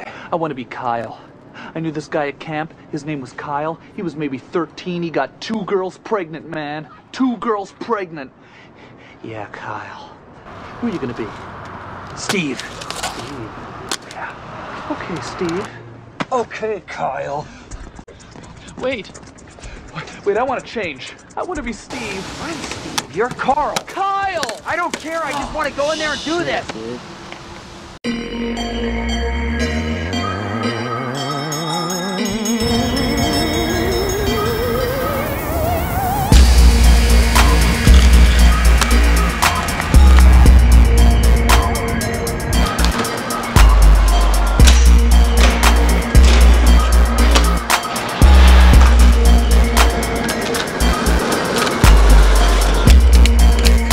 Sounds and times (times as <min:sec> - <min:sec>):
Speech: 0:10.8 - 0:11.4, 0:14.9 - 0:17.5, 0:18.7 - 0:19.2, 0:19.9 - 0:27.0
Music: 0:28.1 - 0:53.9.